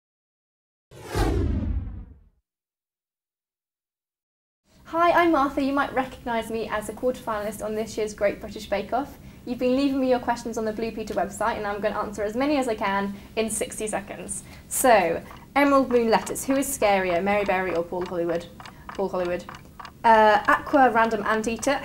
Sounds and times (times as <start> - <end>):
Speech: 4.9 - 21.8.